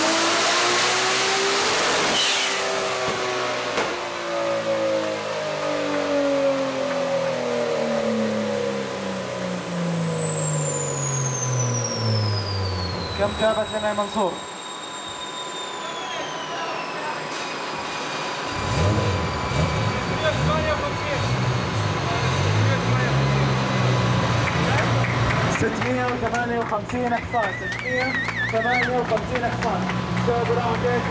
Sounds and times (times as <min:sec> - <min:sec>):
Speech: 0:13.2 - 0:14.4, 0:19.9 - 0:23.4, 0:24.7 - 0:31.1.